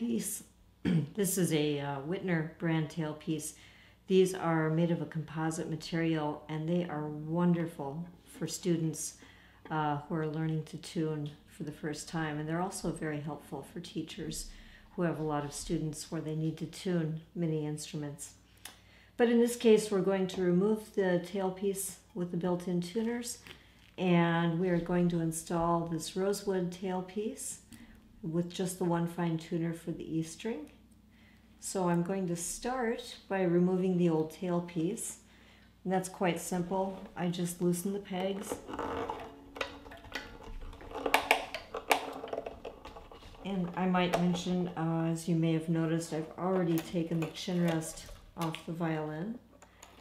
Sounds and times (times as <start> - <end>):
Speech: 0.0 - 18.4, 19.2 - 30.8, 31.6 - 35.2, 35.8 - 38.6, 43.4 - 49.5.